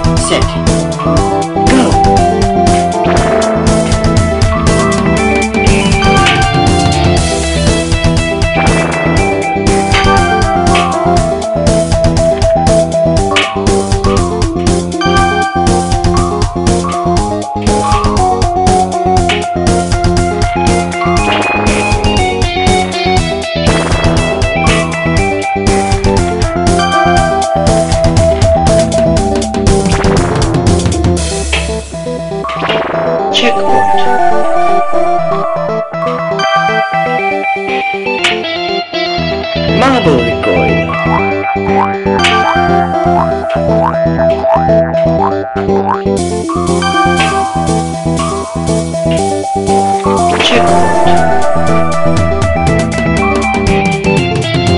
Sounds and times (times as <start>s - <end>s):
Music: 0.0s - 54.7s
Speech: 0.2s - 0.6s, 33.4s - 34.9s, 39.8s - 40.9s, 50.3s - 51.4s.